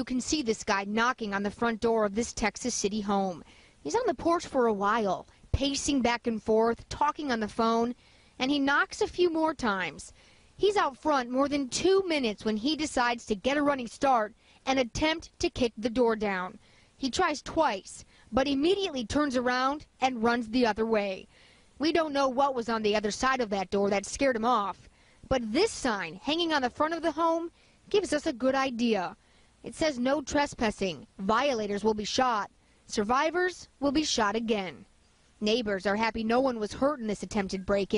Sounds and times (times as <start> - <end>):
Speech: 0.0 - 37.9.